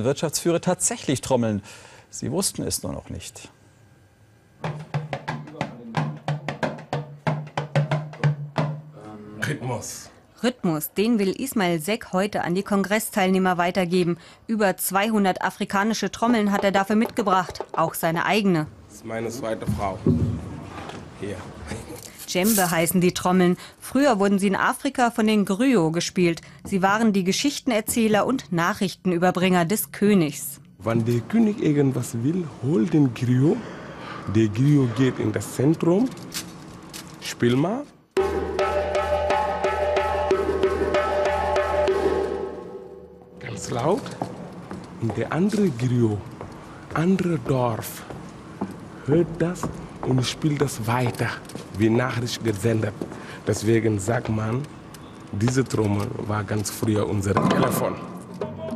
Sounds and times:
Speech: 5.5s - 6.1s, 9.0s - 13.8s, 14.6s - 20.1s, 26.8s - 33.6s, 34.3s - 36.1s, 37.2s - 38.0s.

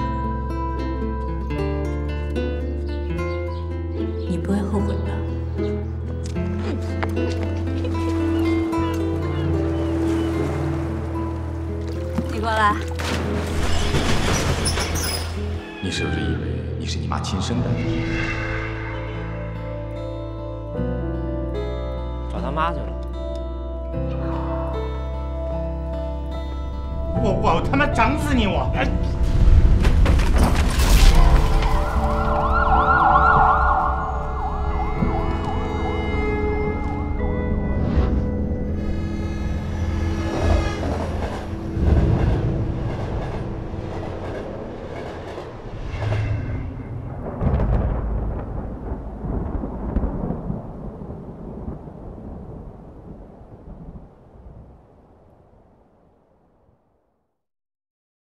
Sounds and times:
Ambulance (siren): 31.4s - 37.2s.

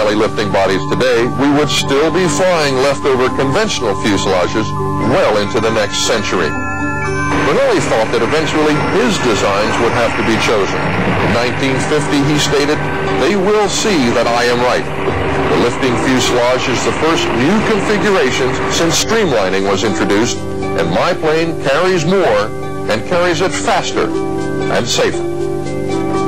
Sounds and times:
Fixed-wing aircraft, airplane: 7.3s - 20.6s.

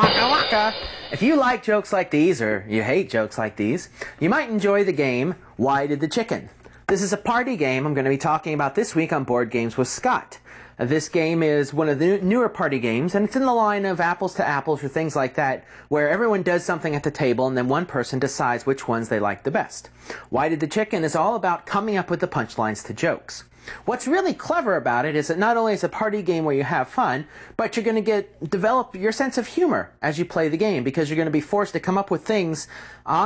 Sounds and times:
Speech: 0.0s - 33.2s.

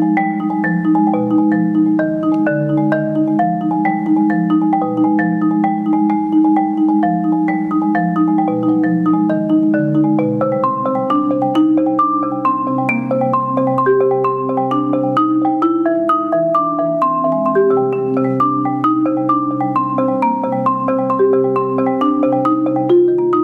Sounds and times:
Vibraphone: 0.0s - 23.4s.

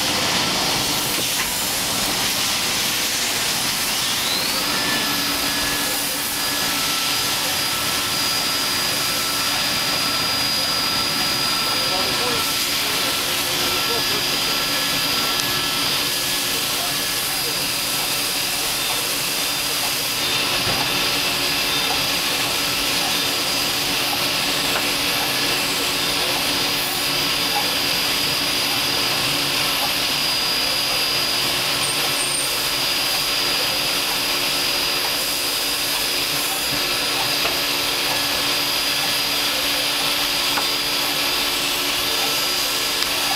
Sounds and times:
Vacuum cleaner: 0.0s - 43.3s.

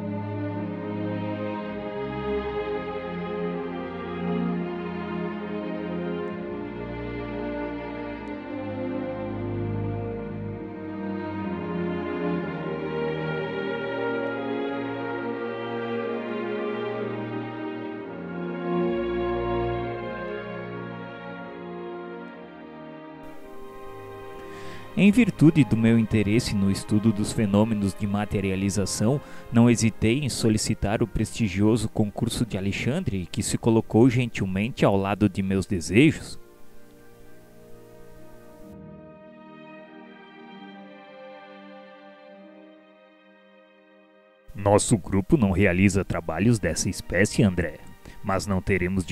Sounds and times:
Music: 0.0s - 49.1s.

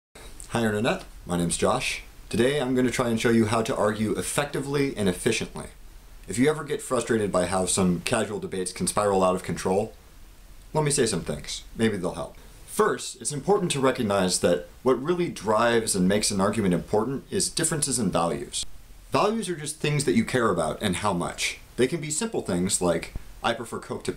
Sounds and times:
Speech: 0.4s - 10.0s, 10.7s - 24.1s.

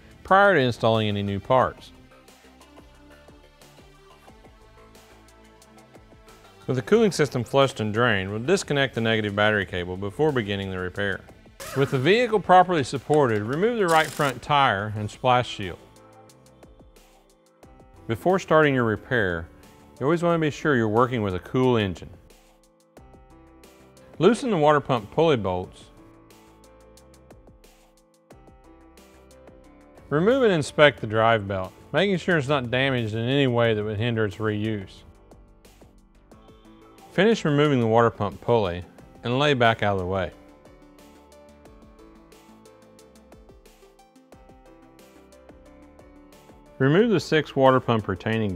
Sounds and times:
Music: 0.0s - 48.5s
Speech: 0.3s - 1.9s, 6.7s - 15.8s, 18.1s - 22.1s, 24.2s - 25.9s, 30.1s - 35.0s, 37.2s - 40.4s, 46.8s - 48.5s.

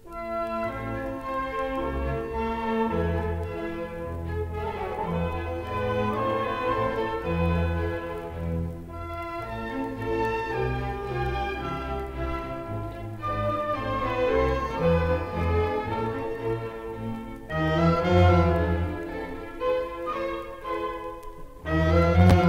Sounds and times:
Orchestra: 0.0s - 22.4s
Violin, fiddle: 0.0s - 22.4s.

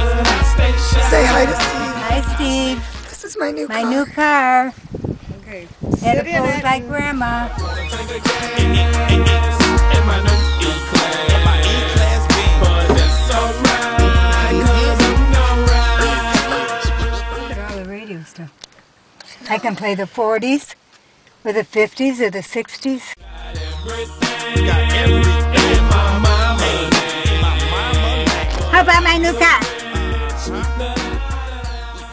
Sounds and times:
Music: 0.0s - 3.1s, 7.1s - 17.9s, 23.2s - 32.1s
Speech: 1.1s - 2.0s, 5.3s - 7.5s, 28.7s - 29.7s.

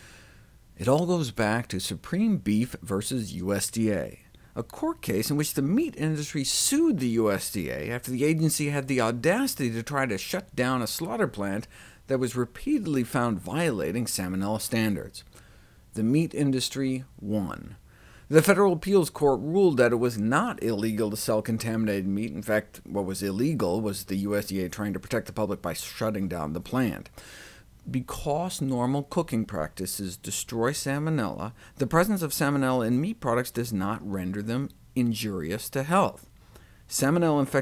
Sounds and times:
Speech: 0.8s - 15.3s, 16.0s - 27.1s, 27.9s - 36.3s, 36.9s - 37.6s.

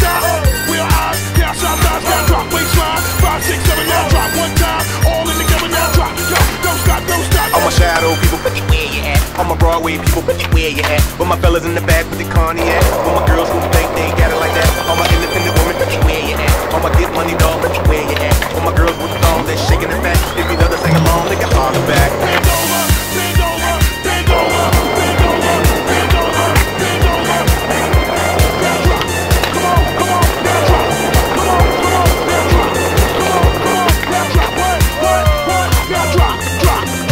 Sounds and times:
Music: 0.0s - 37.1s
Skateboard: 0.0s - 37.1s.

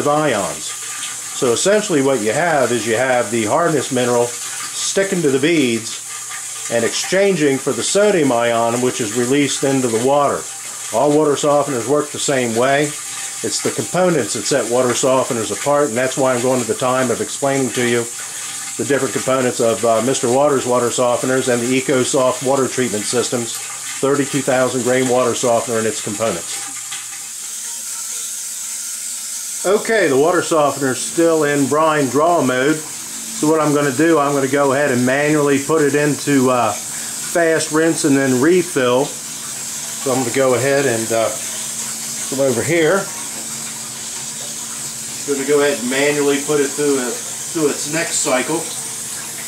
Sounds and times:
Speech: 0.0s - 0.8s, 1.4s - 6.0s, 6.7s - 18.2s, 18.8s - 26.7s, 29.6s - 39.2s, 40.0s - 41.5s, 42.3s - 43.2s, 45.3s - 48.8s.

